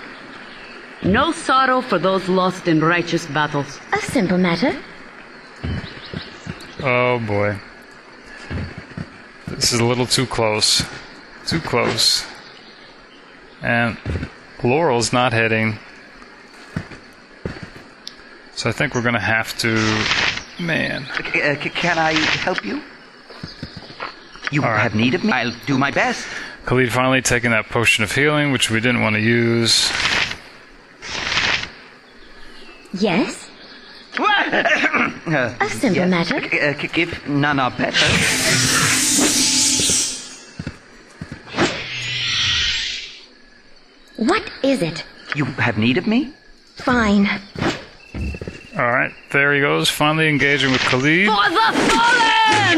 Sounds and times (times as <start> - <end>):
Outside, rural or natural: 0.0 - 52.7.